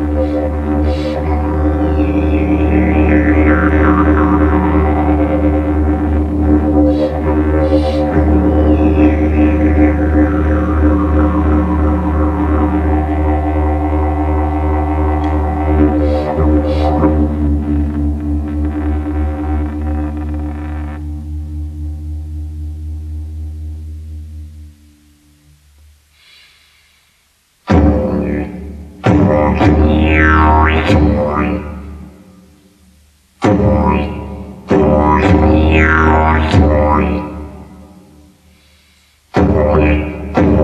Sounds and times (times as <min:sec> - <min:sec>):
Didgeridoo: 0:00.0 - 0:26.1, 0:27.6 - 0:32.6, 0:33.4 - 0:38.5, 0:39.3 - 0:40.6.